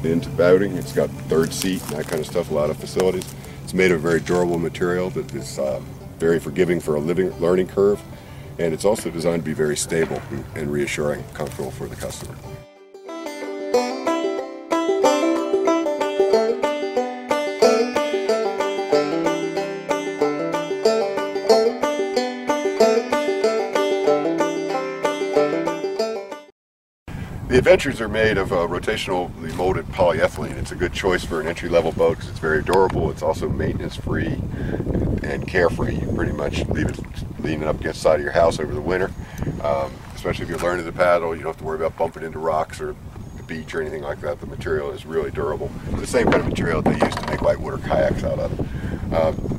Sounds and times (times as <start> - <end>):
Speech: 0.0 - 8.0, 8.6 - 12.4, 27.5 - 34.4, 35.2 - 48.5, 49.1 - 49.4
Music: 12.5 - 26.5.